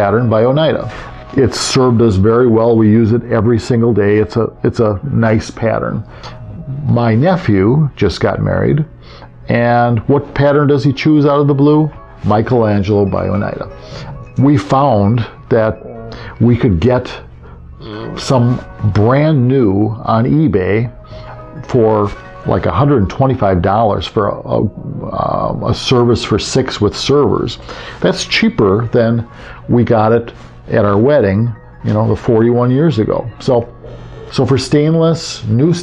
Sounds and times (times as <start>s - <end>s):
Music: 0.0s - 35.8s
Narration, monologue: 0.0s - 35.8s.